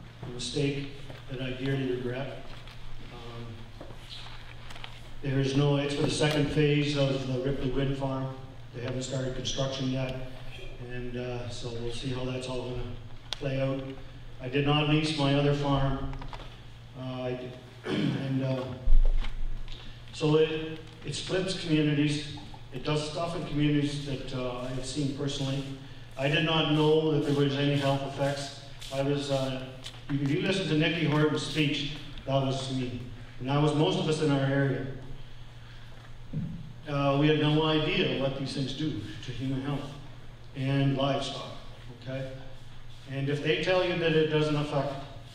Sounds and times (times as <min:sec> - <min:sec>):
Speech: 0:00.2 - 0:02.5, 0:03.1 - 0:03.7, 0:05.2 - 0:16.2, 0:17.0 - 0:18.9, 0:20.2 - 0:35.1, 0:36.9 - 0:45.2.